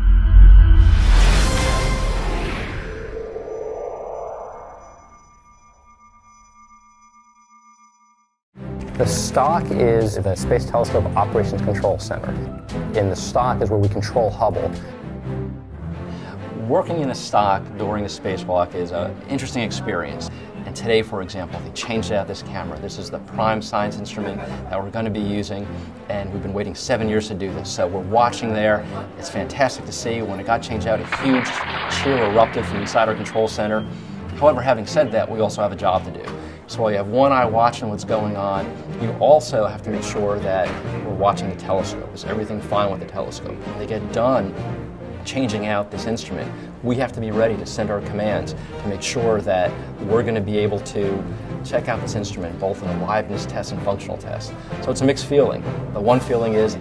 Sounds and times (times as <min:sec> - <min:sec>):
Music: 0:00.0 - 0:03.4, 0:05.0 - 0:56.8
Speech: 0:09.0 - 0:14.9, 0:16.6 - 0:44.6, 0:45.2 - 0:56.8.